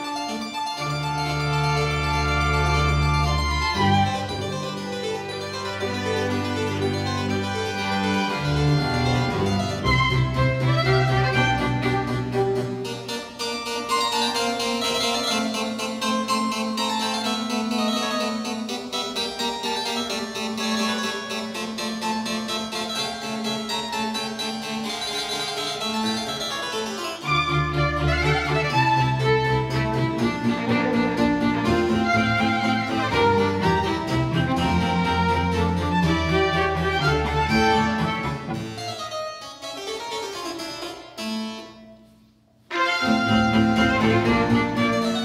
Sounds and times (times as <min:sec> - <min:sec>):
Piano: 0:00.0 - 0:42.1, 0:42.7 - 0:45.2.